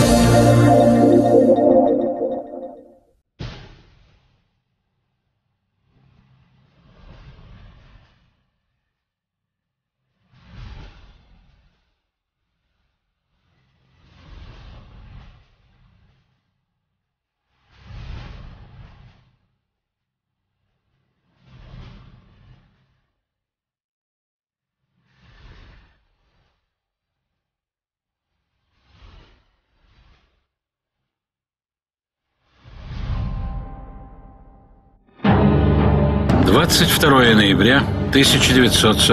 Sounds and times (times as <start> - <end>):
Music: 0.0 - 2.9, 33.3 - 39.1.